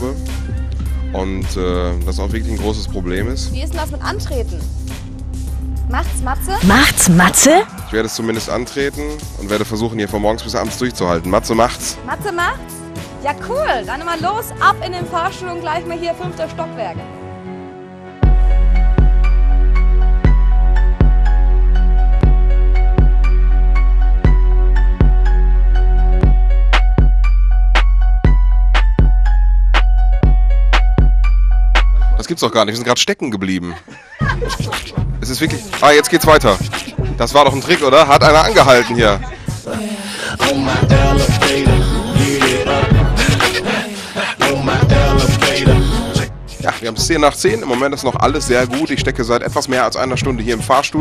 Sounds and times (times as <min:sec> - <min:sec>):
Music: 0:00.0 - 0:33.2, 0:33.8 - 0:51.0.